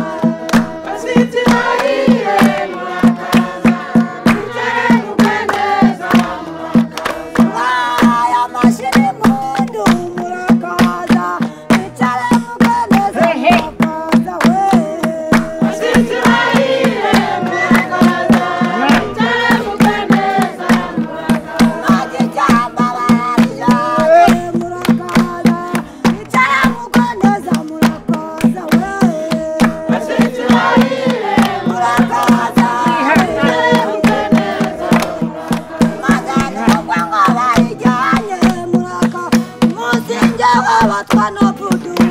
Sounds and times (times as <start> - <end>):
Choir: 0.0 - 42.1
Male singing: 7.5 - 16.2, 21.8 - 30.7, 31.7 - 34.4, 35.9 - 42.1
Female singing: 7.5 - 16.4, 17.4 - 30.8, 31.4 - 34.8, 35.8 - 42.1
Speech: 13.2 - 13.7.